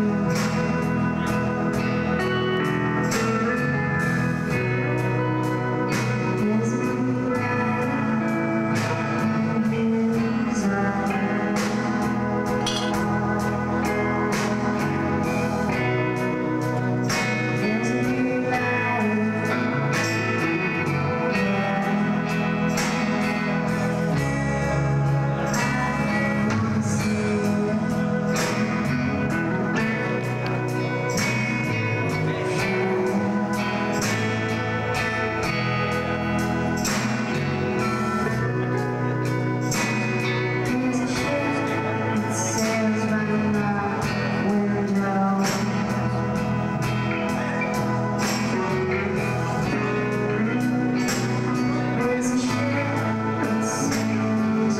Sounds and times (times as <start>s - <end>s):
Music: 0.0s - 54.7s.